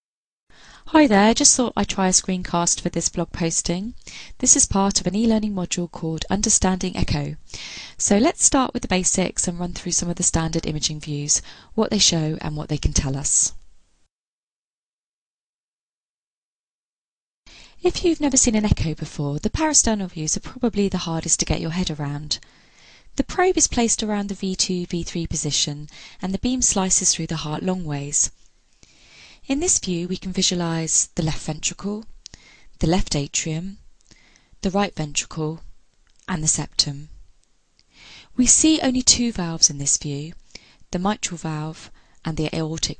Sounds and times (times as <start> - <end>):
Speech: 0.9 - 7.4, 8.0 - 13.6, 17.8 - 22.4, 23.2 - 28.3, 29.5 - 32.1, 32.8 - 33.8, 34.6 - 35.7, 36.3 - 37.2, 38.4 - 42.9.